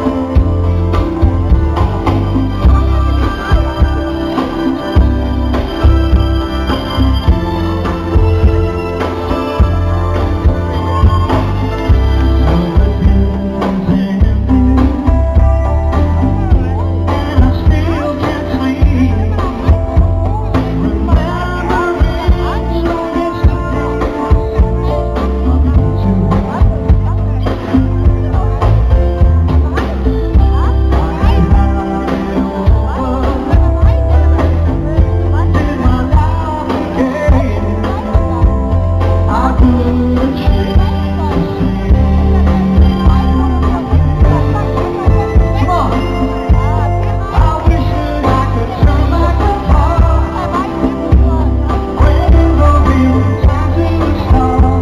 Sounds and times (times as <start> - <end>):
Music: 0.0 - 54.8.